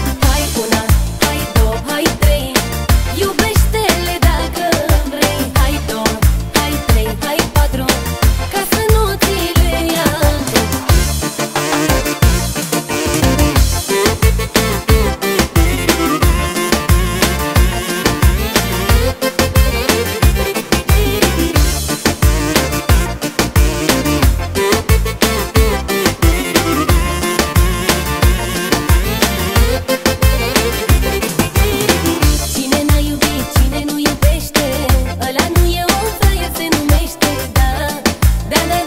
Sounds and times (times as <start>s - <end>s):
Music: 0.0s - 38.8s.